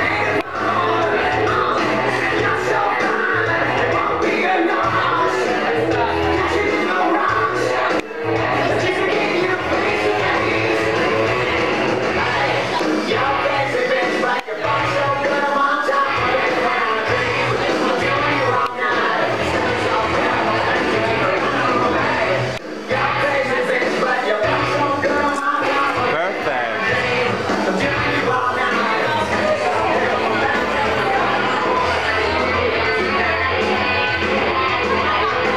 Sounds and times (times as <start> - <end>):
Rock and roll: 0.0 - 35.5
Speech: 26.0 - 27.0.